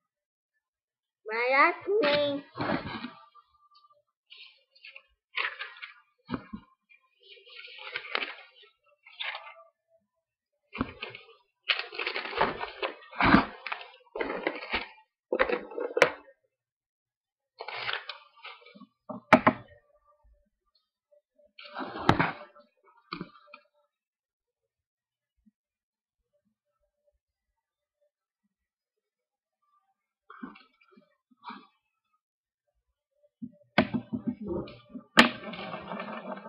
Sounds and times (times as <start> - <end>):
Child speech, kid speaking: 1.3 - 2.6.